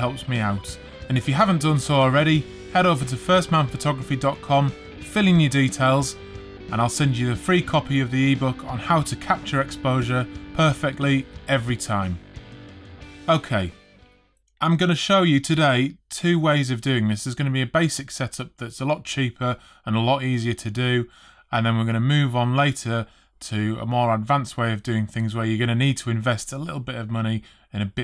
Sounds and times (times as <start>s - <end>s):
Speech: 0.0s - 12.2s, 13.3s - 13.8s, 14.6s - 28.0s
Music: 0.0s - 14.4s.